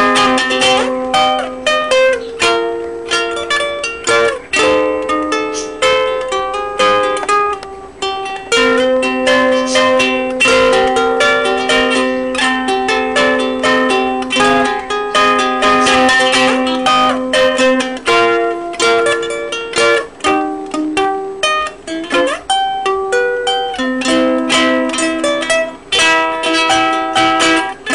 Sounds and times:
Guitar: 0.0s - 27.9s.

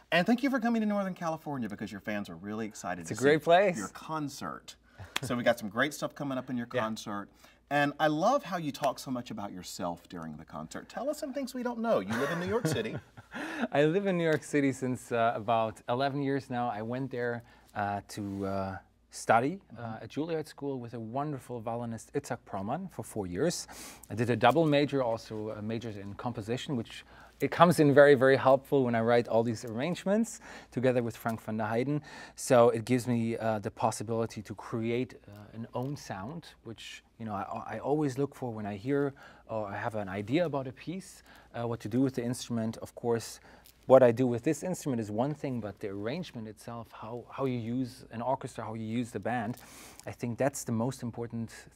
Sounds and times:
Speech: 0.1s - 13.0s, 13.7s - 51.7s.

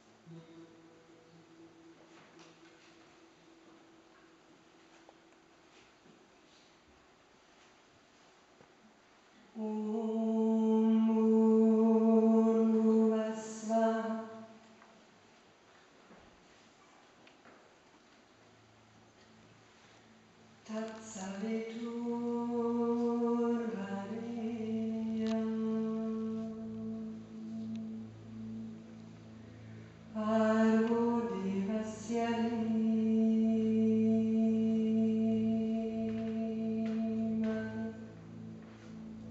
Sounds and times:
Mantra: 9.5s - 14.7s, 20.6s - 28.9s, 30.1s - 39.3s.

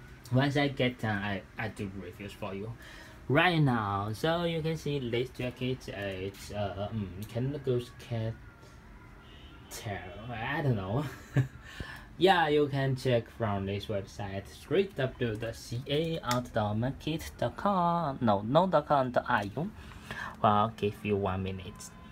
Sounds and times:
Speech: 0.3s - 8.4s, 9.7s - 11.1s, 12.2s - 19.8s, 20.4s - 22.0s.

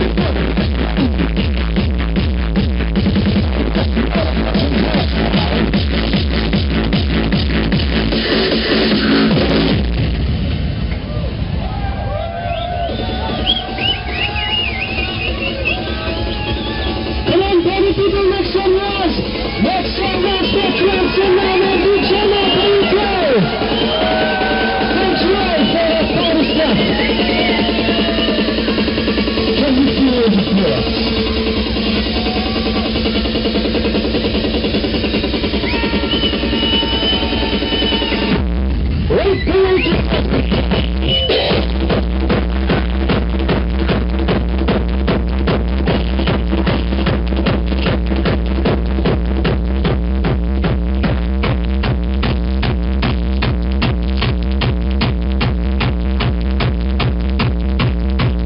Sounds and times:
Music: 0.0s - 58.4s
Speech: 17.3s - 23.4s.

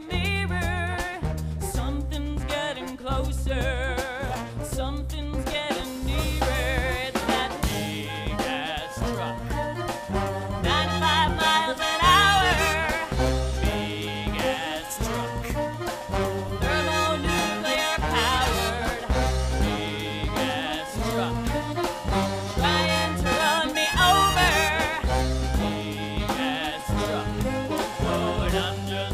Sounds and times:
Music: 0.0s - 29.1s.

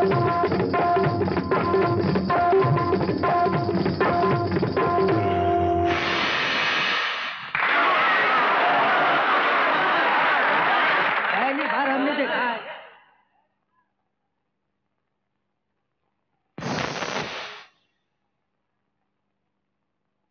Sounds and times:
Music of Bollywood: 0.0s - 6.2s
Speech: 11.3s - 13.0s.

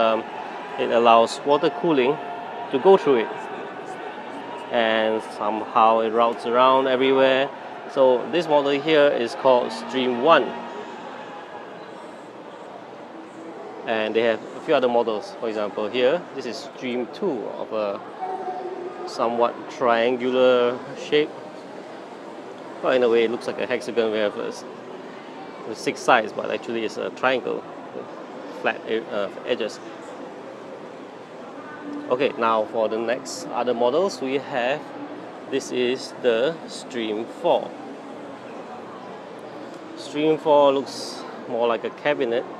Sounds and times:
Speech: 0.0s - 0.2s, 0.8s - 3.4s, 4.7s - 10.7s, 13.9s - 21.3s, 25.6s - 27.6s, 32.0s - 34.8s, 35.5s - 37.7s, 40.0s - 42.5s.

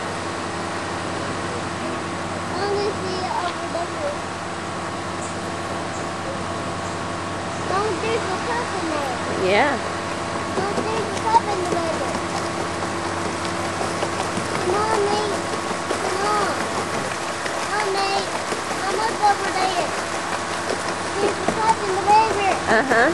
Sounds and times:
Stream: 0.0s - 23.1s.

